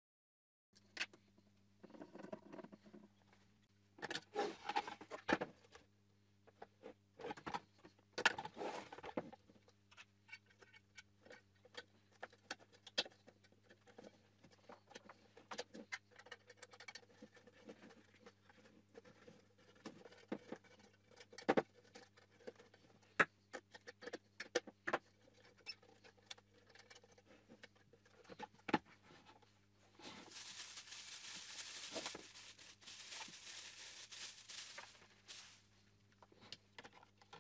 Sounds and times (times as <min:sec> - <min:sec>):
Inside, small room: 0:00.8 - 0:37.4.